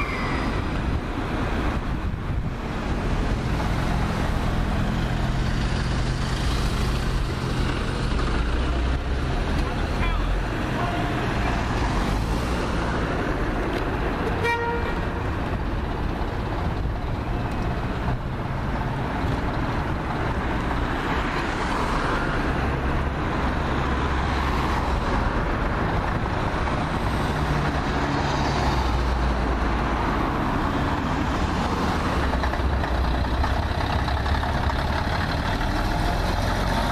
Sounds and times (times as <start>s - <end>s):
Bus: 0.0s - 36.9s.